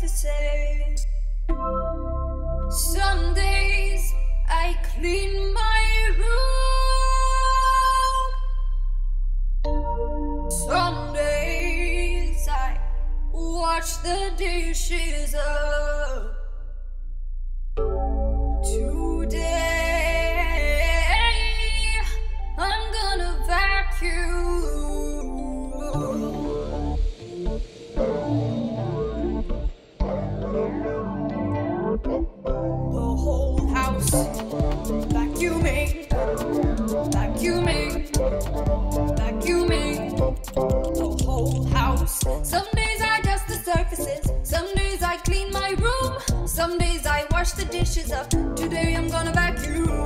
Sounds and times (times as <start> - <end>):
Music: 0.1 - 7.6, 9.7 - 14.7, 17.8 - 50.0.